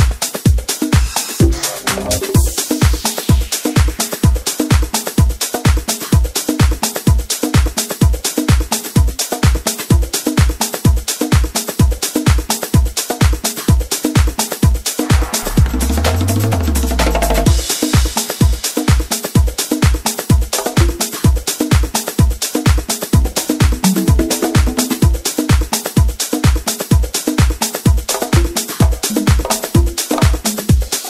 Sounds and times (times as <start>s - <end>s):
Music: 0.0s - 31.0s.